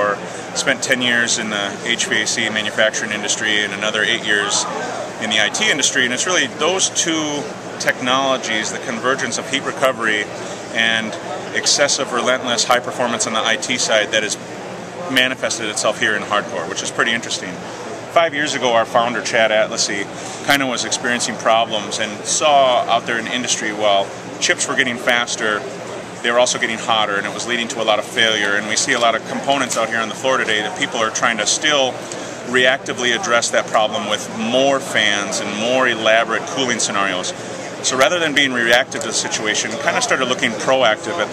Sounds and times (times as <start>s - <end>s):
Speech: 0.0s - 41.3s.